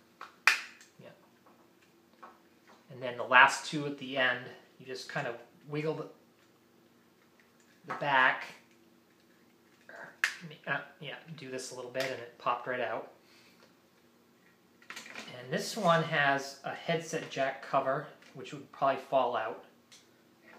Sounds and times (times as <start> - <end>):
Inside, small room: 0.0 - 20.5
Speech: 2.9 - 6.2, 7.9 - 8.7, 9.9 - 13.1, 15.2 - 19.7.